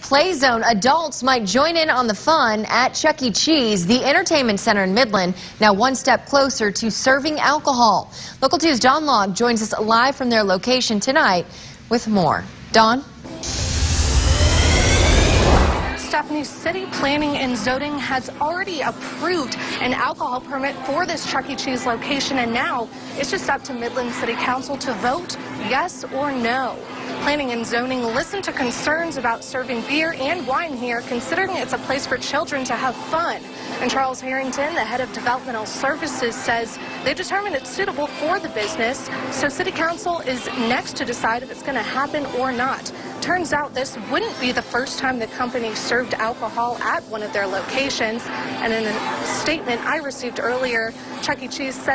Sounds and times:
Speech: 0.0 - 13.1, 16.0 - 51.9
Music: 13.2 - 51.9.

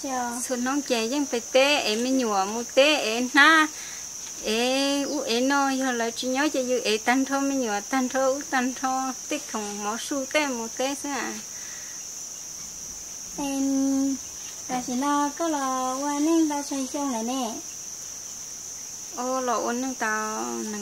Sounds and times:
Outside, rural or natural: 0.0 - 20.8.

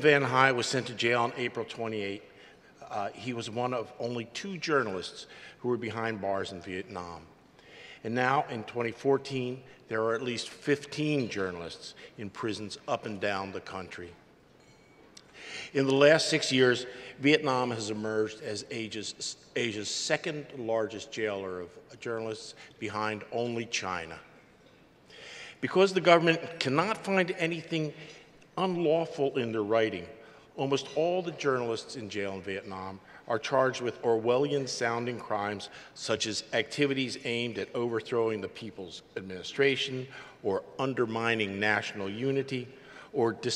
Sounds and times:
Male speech, man speaking: 0.0 - 7.3, 8.0 - 14.2, 15.7 - 24.3, 25.6 - 28.0, 28.6 - 43.5
Narration, monologue: 0.0 - 43.5.

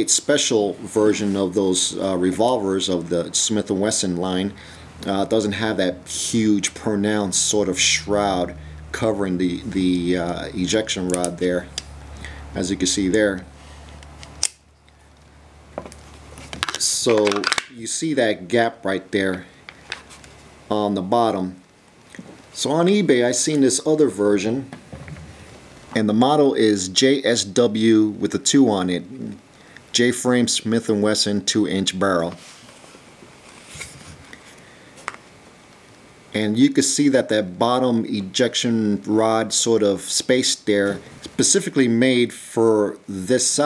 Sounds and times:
Speech: 0.0 - 11.7, 12.6 - 13.5, 16.7 - 19.5, 20.7 - 21.6, 22.6 - 24.8, 26.0 - 32.4, 36.3 - 43.6.

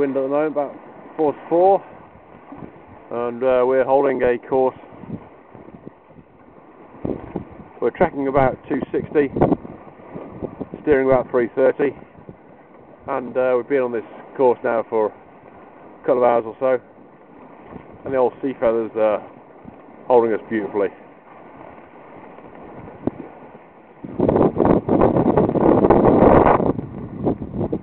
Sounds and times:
Sailboat, sailing ship: 0.0 - 27.8
Wind noise (microphone): 1.8 - 3.3, 4.6 - 13.2, 17.5 - 18.4, 19.1 - 20.0, 21.4 - 27.8.

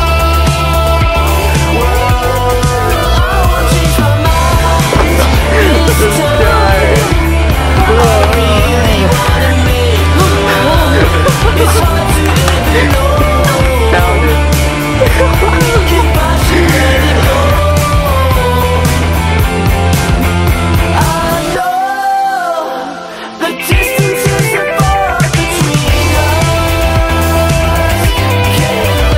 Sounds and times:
Grunge: 0.0 - 29.1.

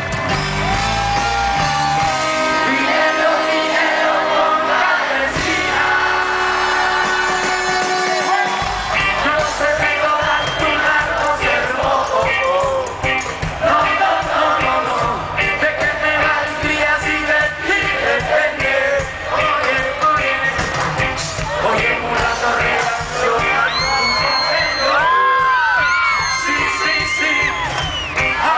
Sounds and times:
Music: 0.0 - 28.5.

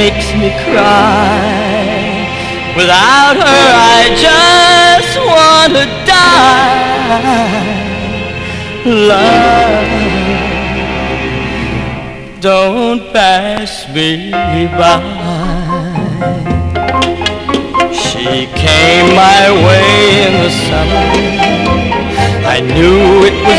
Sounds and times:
Bowed string instrument: 0.0 - 23.5.

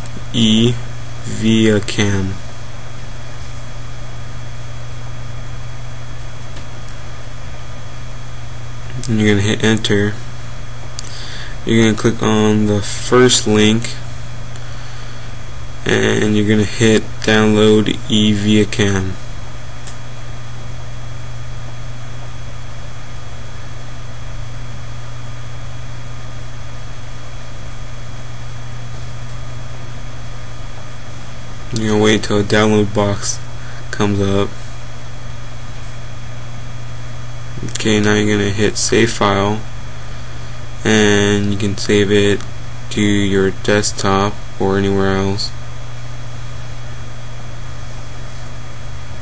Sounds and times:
Speech: 0.2 - 2.4, 8.9 - 10.2, 11.6 - 14.0, 15.8 - 19.2, 31.7 - 34.6, 37.6 - 39.7, 40.8 - 45.6.

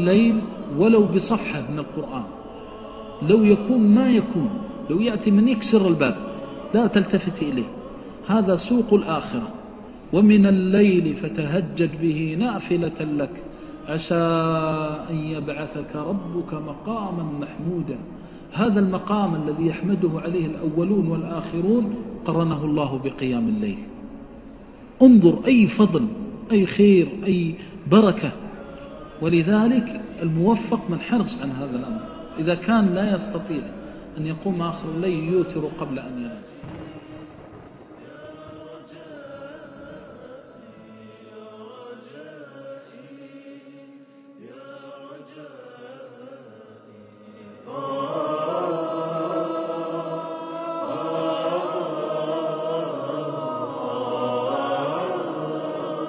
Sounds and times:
Chant: 0.0 - 56.0.

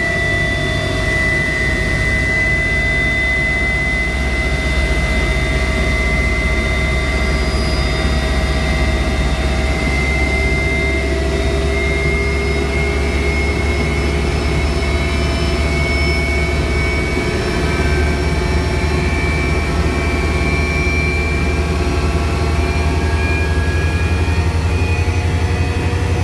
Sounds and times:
Fixed-wing aircraft, airplane: 0.0 - 26.2
Jet engine: 0.0 - 26.2.

